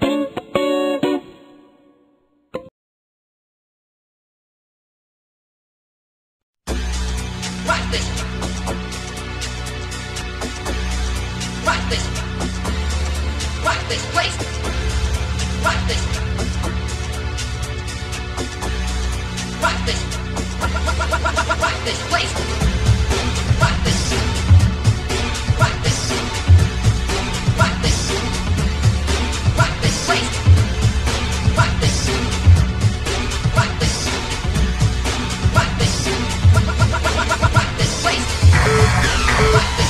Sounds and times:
Music: 0:00.0 - 0:02.7, 0:06.7 - 0:39.8.

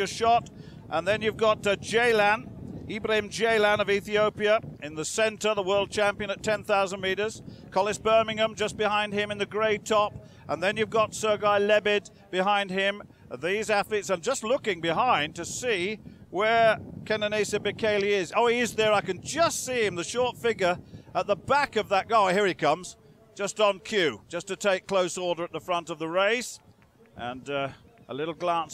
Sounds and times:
Outside, urban or manmade: 0:00.0 - 0:28.7
Speech: 0:00.0 - 0:28.7
Run: 0:02.4 - 0:19.2, 0:19.8 - 0:28.7.

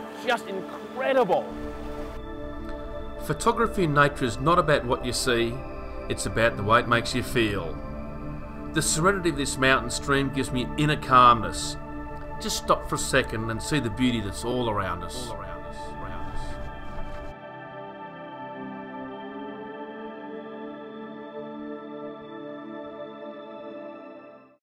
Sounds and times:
New-age music: 0:00.0 - 0:24.6.

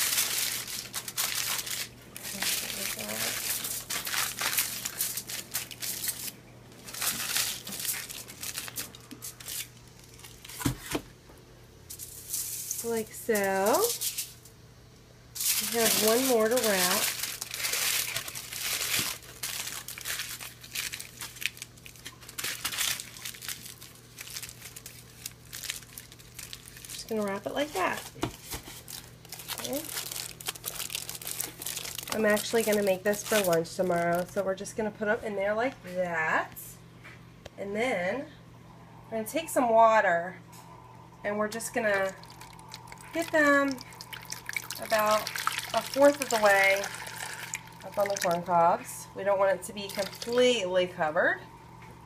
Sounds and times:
Inside, small room: 0:00.0 - 0:52.0
Speech: 0:02.3 - 0:03.4, 0:12.8 - 0:14.0, 0:15.6 - 0:17.1, 0:27.0 - 0:28.1, 0:29.6 - 0:29.9, 0:32.1 - 0:36.8, 0:37.6 - 0:38.4, 0:39.1 - 0:40.4, 0:41.2 - 0:42.2, 0:44.8 - 0:46.9, 0:47.9 - 0:51.5.

